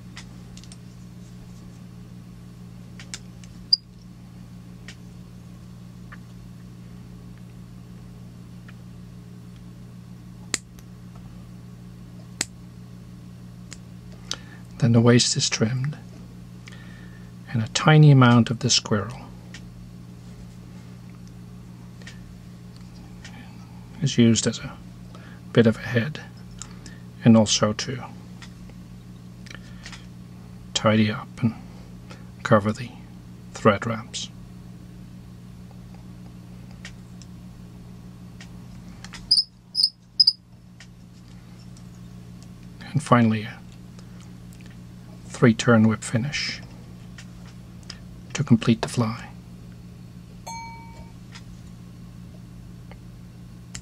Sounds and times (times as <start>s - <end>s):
Speech: 14.8s - 16.1s, 17.5s - 19.3s, 24.0s - 24.8s, 25.5s - 26.3s, 27.2s - 28.2s, 30.8s - 31.6s, 32.4s - 34.4s, 42.8s - 43.7s, 45.3s - 46.7s, 48.3s - 49.4s.